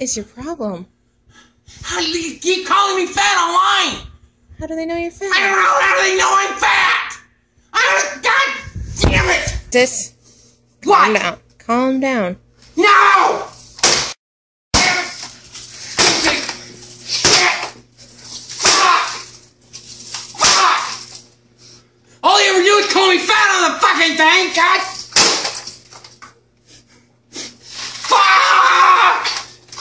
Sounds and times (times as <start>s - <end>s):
Inside, small room: 0.0s - 14.2s, 14.8s - 29.8s
Speech: 1.8s - 7.2s, 7.8s - 10.1s, 22.2s - 25.0s.